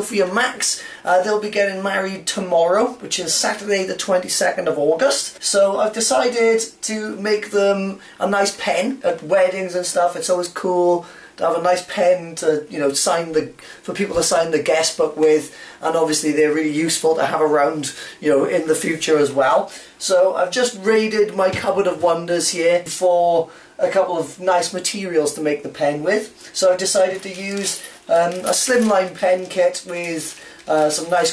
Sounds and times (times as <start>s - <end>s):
Speech: 0.0s - 31.3s.